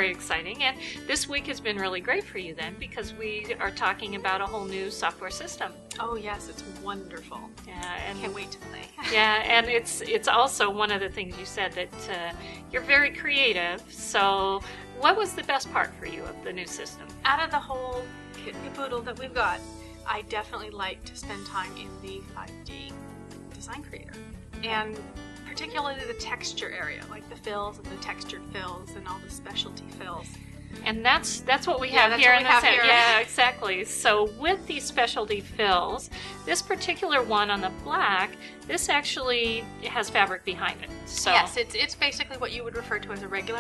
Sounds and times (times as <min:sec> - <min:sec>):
Speech: 0:00.0 - 0:23.0, 0:23.6 - 0:24.0, 0:24.6 - 0:30.3, 0:30.9 - 0:43.6
Music: 0:00.0 - 0:43.6.